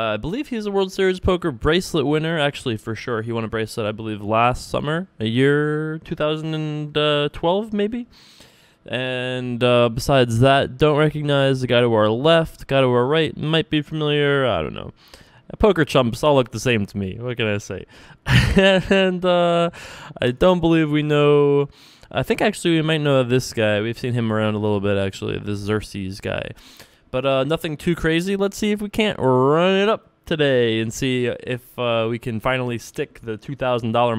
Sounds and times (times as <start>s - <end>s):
Speech: 0.0s - 8.1s, 8.9s - 34.1s.